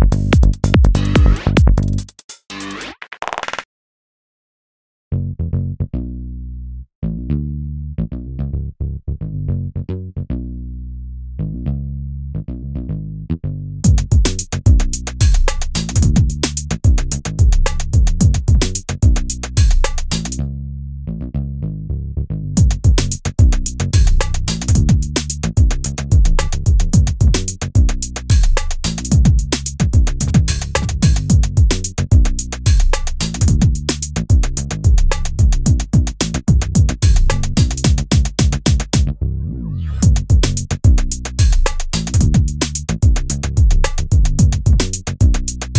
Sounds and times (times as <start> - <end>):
Music: 0.0 - 3.6, 10.3 - 20.6, 21.2 - 45.7.